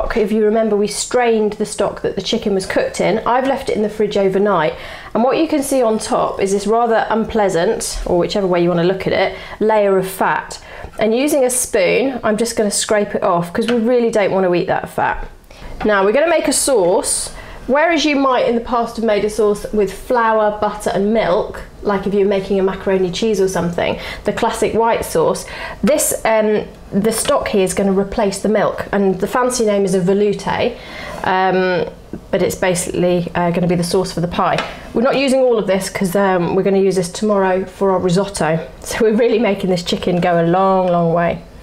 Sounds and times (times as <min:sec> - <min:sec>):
Speech: 0:00.0 - 0:41.5.